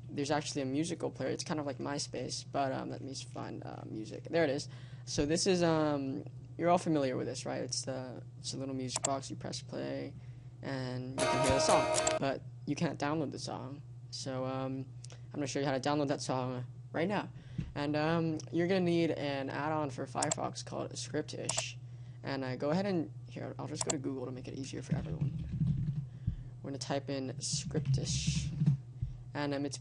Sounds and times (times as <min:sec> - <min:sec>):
Speech: 0:00.1 - 0:25.4, 0:26.6 - 0:28.6, 0:29.4 - 0:29.8
Music: 0:11.2 - 0:12.2.